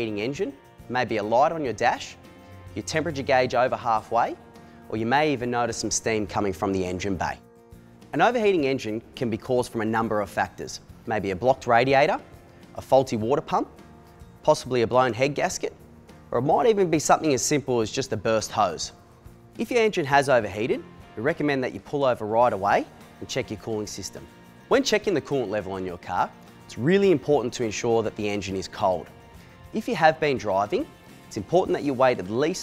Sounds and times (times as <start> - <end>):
Speech: 0.0 - 2.2, 2.8 - 7.4, 8.1 - 13.7, 14.4 - 19.0, 19.6 - 29.1, 29.7 - 32.6.